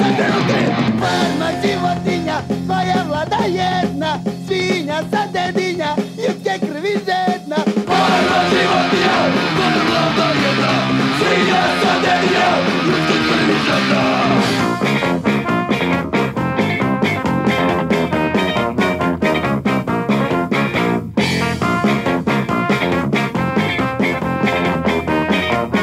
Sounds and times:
Punk rock: 0:00.0 - 0:25.8.

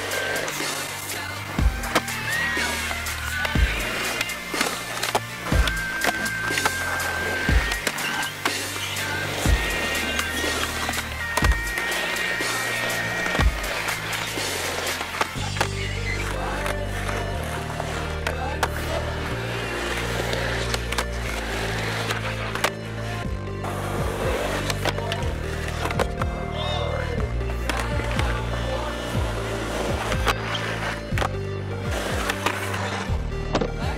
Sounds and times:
Music: 0:00.0 - 0:33.9
Skateboard: 0:00.0 - 0:33.9.

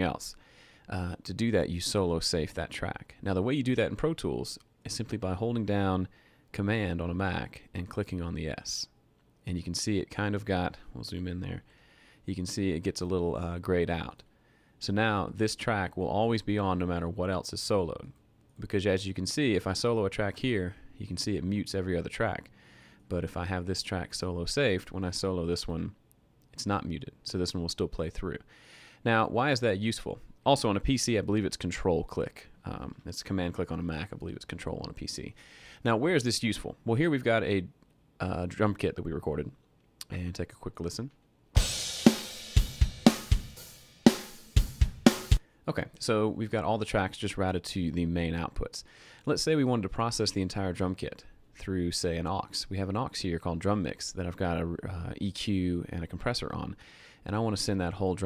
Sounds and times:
Speech: 0:00.0 - 0:11.7, 0:12.3 - 0:22.5, 0:23.1 - 0:41.2, 0:45.7 - 0:58.2.

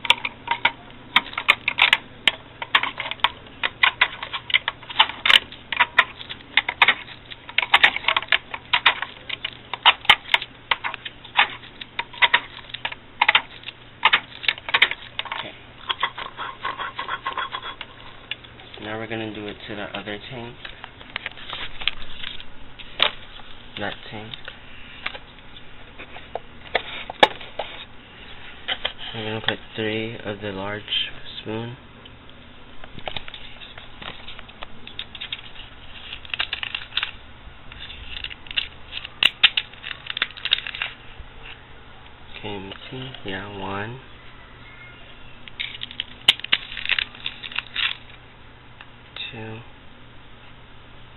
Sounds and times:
Inside, small room: 0:00.0 - 0:51.1
Speech: 0:18.8 - 0:20.6, 0:23.8 - 0:24.4, 0:29.1 - 0:31.8, 0:42.3 - 0:44.1, 0:49.2 - 0:49.7.

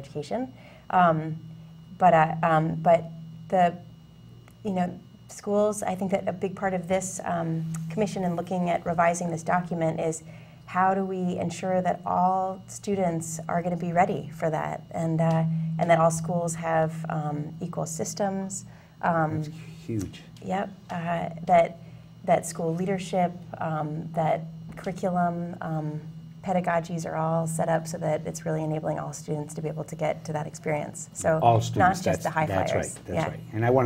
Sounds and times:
Speech: 0:00.0 - 0:01.4, 0:02.0 - 0:03.8, 0:04.7 - 0:21.7, 0:22.3 - 0:33.8.

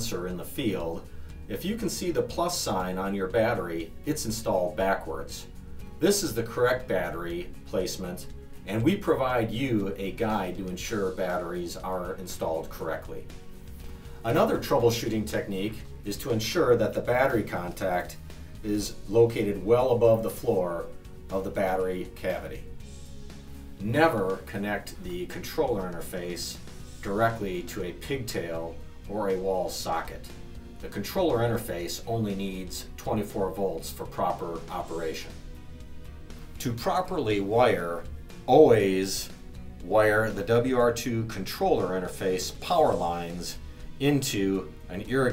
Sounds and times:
Speech: 0:00.0 - 0:13.3, 0:14.2 - 0:22.7, 0:23.8 - 0:35.4, 0:36.6 - 0:45.3
Music: 0:00.0 - 0:45.3.

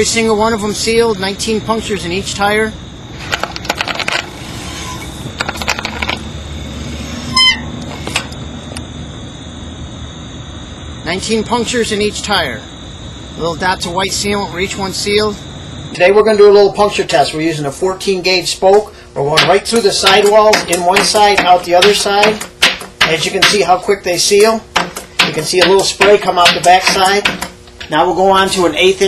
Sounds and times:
Speech: 0:00.0 - 0:02.8, 0:11.1 - 0:12.7, 0:13.4 - 0:15.4, 0:16.0 - 0:22.4, 0:23.0 - 0:24.7, 0:25.3 - 0:29.0.

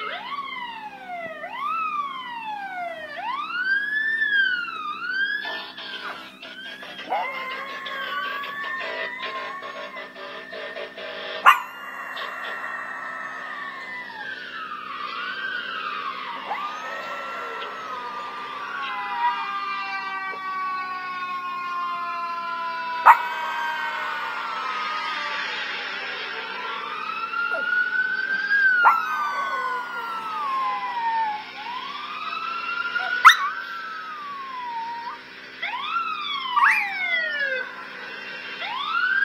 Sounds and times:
Howl: 0:00.0 - 0:38.0.

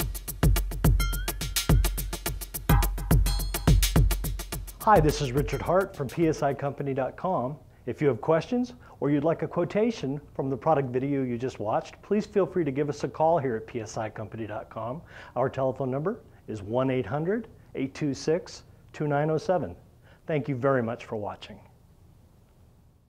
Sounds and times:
Speech: 0:04.8 - 0:21.8.

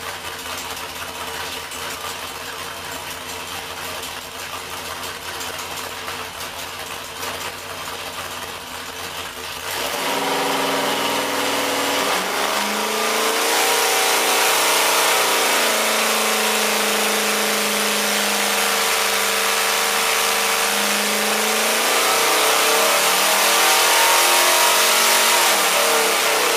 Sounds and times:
Heavy engine (low frequency): 0:00.0 - 0:26.5.

